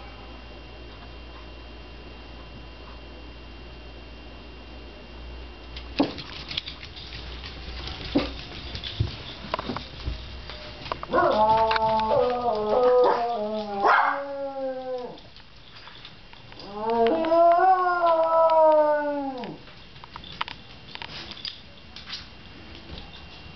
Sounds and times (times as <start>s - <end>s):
Canidae, dogs, wolves: 11.0s - 15.4s
Dog: 11.1s - 14.3s.